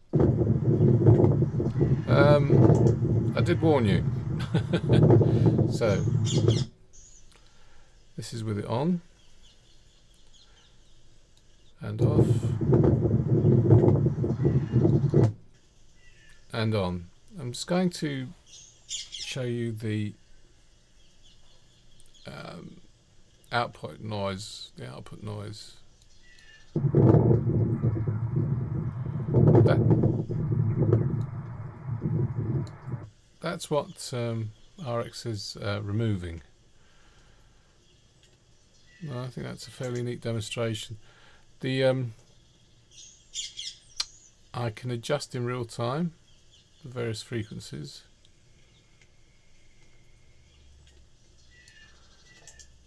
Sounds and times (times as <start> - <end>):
Speech: 2.0 - 2.6, 3.3 - 4.2, 5.7 - 6.2, 8.2 - 9.1, 11.8 - 12.6, 16.5 - 18.4, 19.3 - 20.2, 22.3 - 22.9, 23.5 - 25.8, 33.4 - 36.5, 39.0 - 41.0, 41.6 - 42.2, 44.6 - 46.2, 46.8 - 48.1.